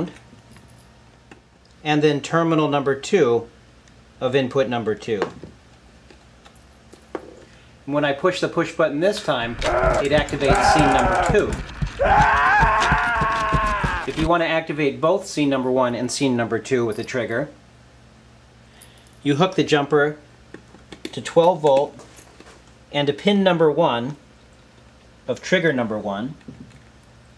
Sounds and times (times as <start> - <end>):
Speech: 1.8 - 3.6, 4.2 - 5.4, 7.9 - 11.6, 14.1 - 17.6, 19.2 - 20.3, 21.1 - 22.0, 22.9 - 24.2, 25.3 - 26.4.